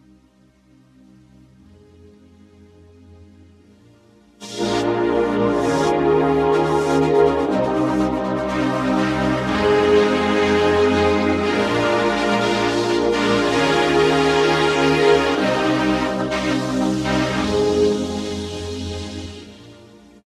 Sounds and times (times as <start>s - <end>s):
Music: 0.0s - 20.3s.